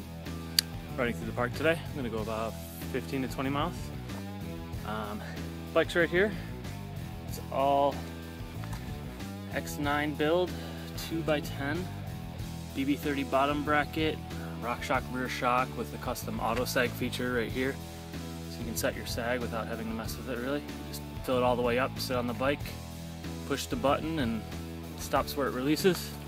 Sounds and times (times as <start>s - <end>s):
Music: 0.0s - 26.2s
Speech: 1.0s - 3.9s, 4.8s - 6.4s, 7.3s - 8.0s, 9.5s - 11.9s, 12.8s - 17.8s, 18.5s - 22.8s, 23.5s - 24.4s, 25.0s - 26.2s.